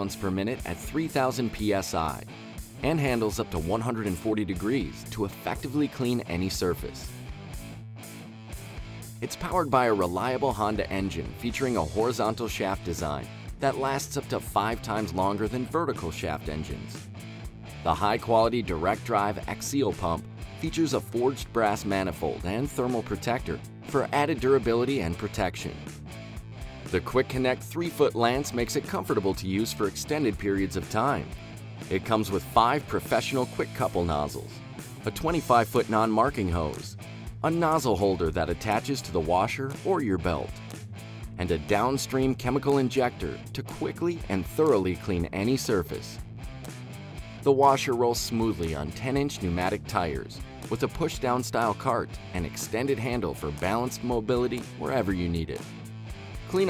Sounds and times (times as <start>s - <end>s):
Speech: 0.0s - 7.1s, 9.2s - 17.0s, 17.8s - 25.8s, 26.9s - 31.3s, 31.9s - 40.6s, 41.4s - 46.2s, 47.4s - 55.6s, 56.5s - 56.6s
Music: 0.0s - 56.6s.